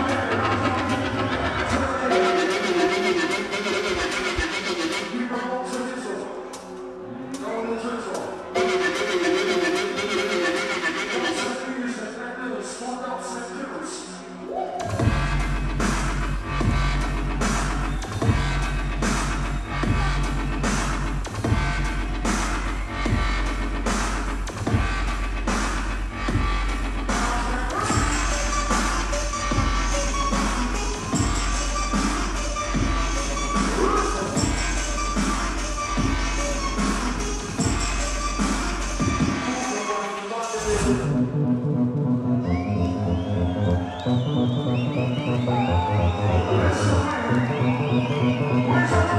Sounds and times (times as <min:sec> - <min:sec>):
Dubstep: 0:00.0 - 0:06.7, 0:14.8 - 0:42.4.